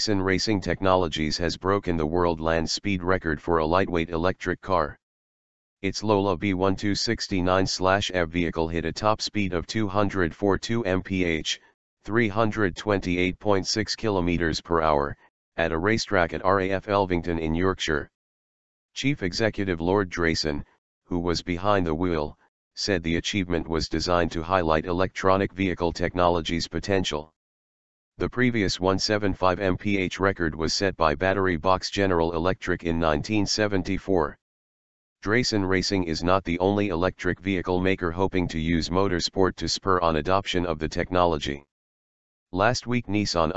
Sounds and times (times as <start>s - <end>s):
Speech: 0.0s - 5.0s, 5.8s - 18.2s, 19.0s - 27.4s, 28.2s - 34.4s, 35.2s - 41.7s, 42.6s - 43.5s.